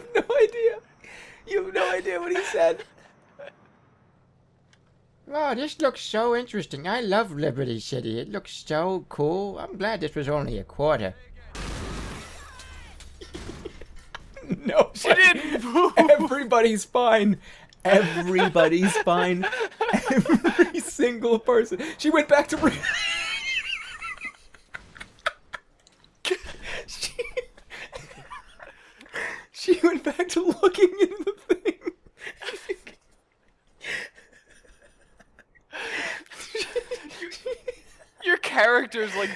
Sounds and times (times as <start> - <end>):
Speech: 1.5 - 2.9, 5.3 - 11.6, 14.6 - 22.8, 29.6 - 31.2, 38.2 - 39.3.